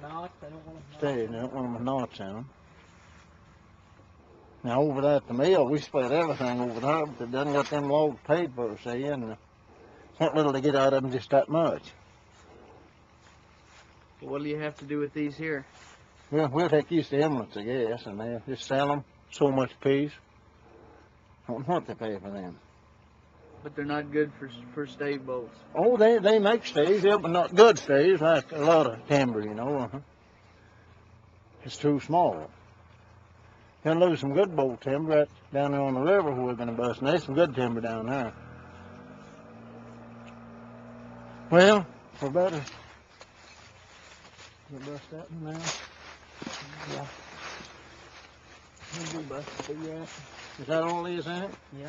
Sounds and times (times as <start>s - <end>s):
Speech: 0.0s - 2.5s, 4.6s - 9.4s, 10.2s - 12.0s, 14.2s - 15.7s, 16.3s - 20.2s, 21.4s - 22.6s, 23.6s - 30.0s, 31.6s - 32.5s, 33.8s - 38.4s, 41.5s - 42.8s, 44.7s - 45.8s, 46.4s - 47.2s, 48.8s - 51.8s.